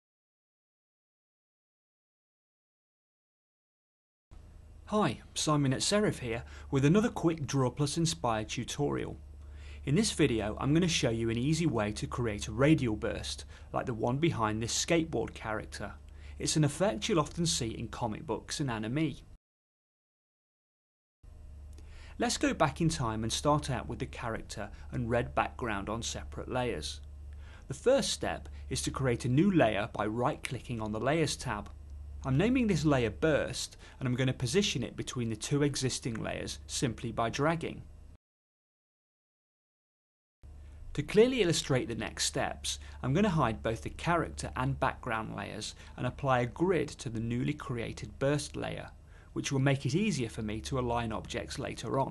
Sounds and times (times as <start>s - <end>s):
Speech: 4.9s - 9.2s, 9.8s - 19.3s, 22.2s - 27.0s, 27.7s - 37.9s, 41.0s - 52.1s.